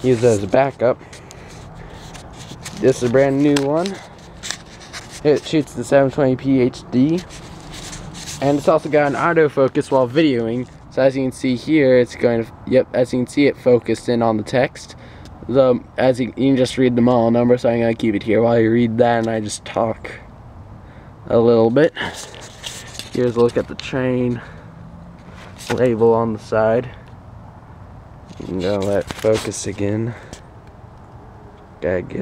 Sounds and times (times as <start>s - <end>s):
Speech: 0.0s - 1.0s, 2.8s - 4.0s, 5.2s - 7.3s, 8.4s - 20.3s, 21.3s - 22.2s, 23.2s - 24.6s, 25.7s - 27.0s, 28.4s - 30.3s, 31.8s - 32.2s.